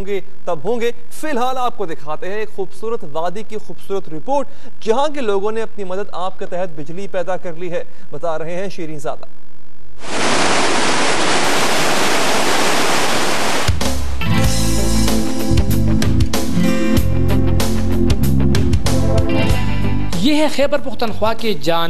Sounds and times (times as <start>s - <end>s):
Speech: 0.0s - 9.3s, 20.2s - 21.8s.